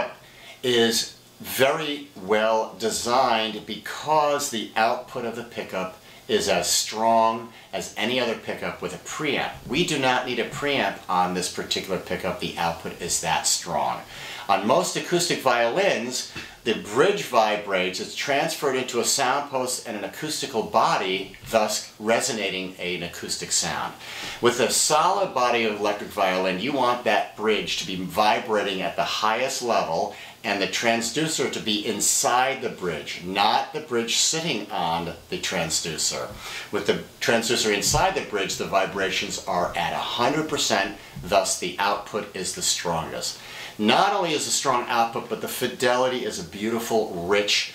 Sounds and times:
Speech: 0:00.0 - 0:47.7.

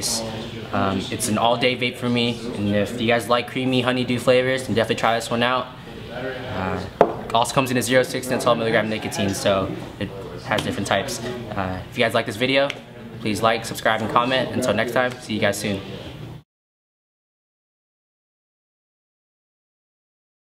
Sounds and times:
Speech: 0:00.0 - 0:16.1.

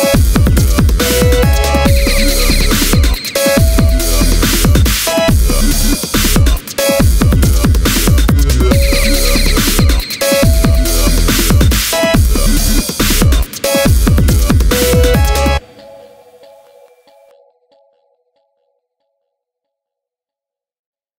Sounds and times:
Dubstep: 0:00.0 - 0:15.7.

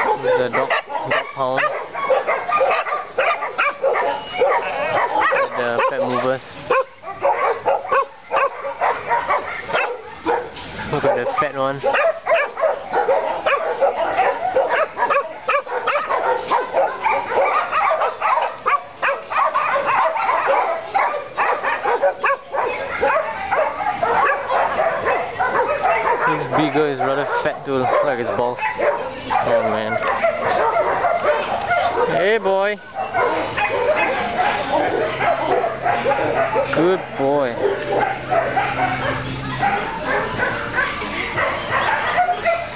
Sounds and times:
Yip: 0:00.0 - 0:36.8, 0:37.6 - 0:42.7
Bow-wow: 0:00.0 - 0:42.7.

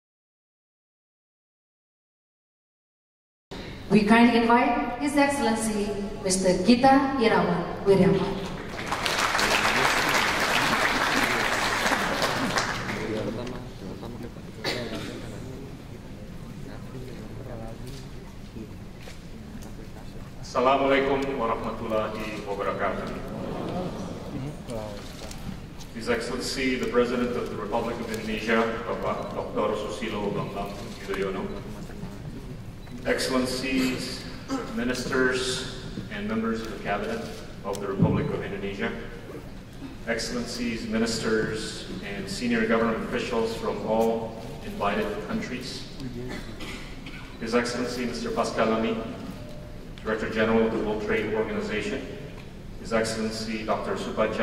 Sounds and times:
Male speech, man speaking: 0:12.9 - 0:18.8, 0:20.0 - 0:25.0, 0:26.0 - 0:31.6, 0:33.0 - 0:39.2, 0:40.1 - 0:46.3, 0:47.4 - 0:49.2, 0:50.0 - 0:52.2, 0:52.8 - 0:54.4.

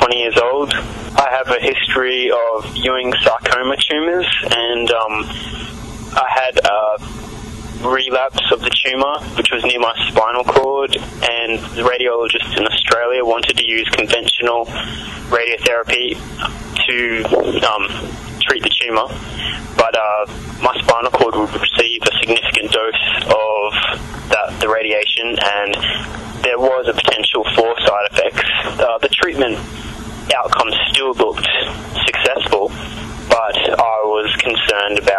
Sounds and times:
Speech: 0:00.0 - 0:07.1, 0:07.8 - 0:35.1.

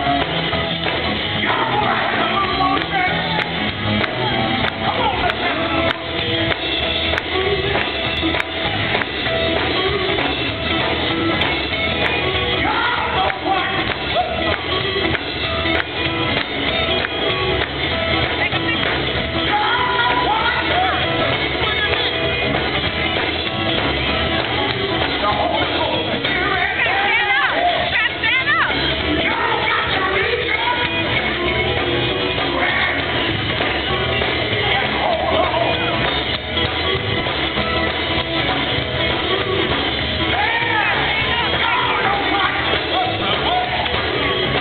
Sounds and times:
Music: 0:00.0 - 0:44.6
Male singing: 0:01.4 - 0:03.5, 0:12.6 - 0:14.5, 0:32.4 - 0:33.2, 0:34.5 - 0:36.1, 0:40.3 - 0:44.6
Speech: 0:18.4 - 0:21.0, 0:25.2 - 0:30.9.

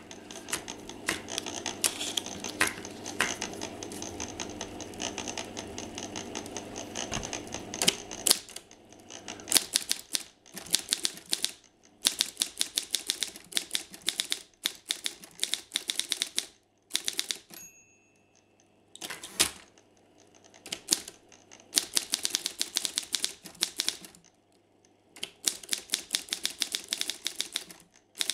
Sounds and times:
Typewriter: 0:00.0 - 0:17.6, 0:19.0 - 0:24.3, 0:25.2 - 0:28.3.

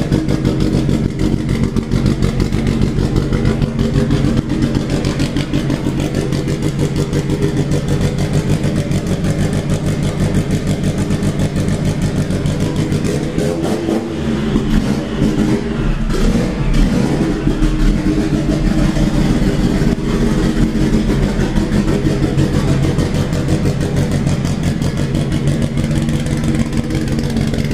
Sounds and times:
Idling: 0:00.0 - 0:27.7.

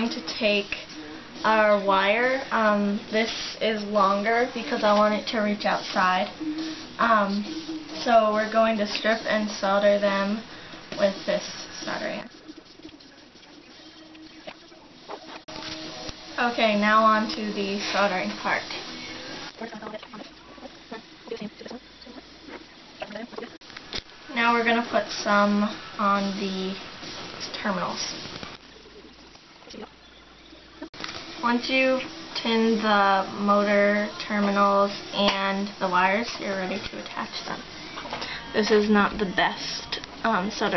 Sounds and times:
Speech: 0:00.0 - 0:06.4, 0:07.0 - 0:10.4, 0:11.0 - 0:12.3, 0:16.4 - 0:18.8, 0:24.3 - 0:26.8, 0:27.4 - 0:28.2, 0:31.4 - 0:37.6, 0:38.5 - 0:40.7
Music: 0:00.0 - 0:40.7.

